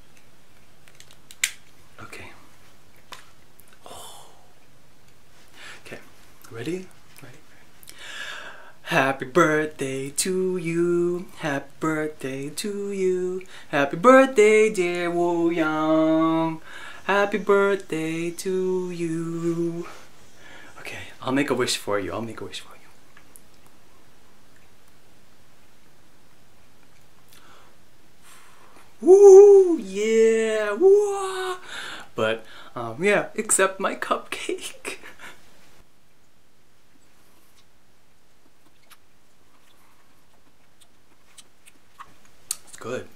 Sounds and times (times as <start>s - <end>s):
Inside, small room: 0.0s - 43.1s.